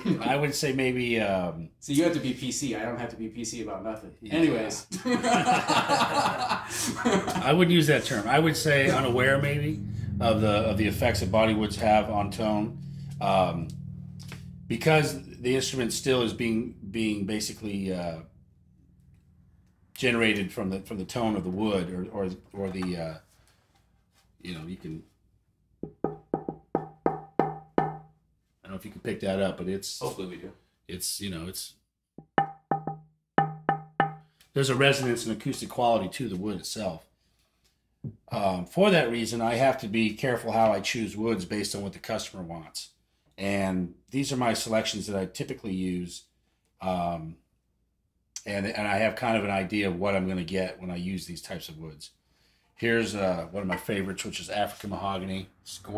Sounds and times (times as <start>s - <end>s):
Speech: 0.0s - 5.0s, 7.2s - 13.7s, 14.7s - 18.3s, 20.0s - 23.2s, 24.4s - 25.0s, 28.6s - 31.8s, 34.6s - 37.0s, 38.2s - 46.2s, 46.8s - 47.4s, 48.4s - 52.1s, 52.8s - 55.9s.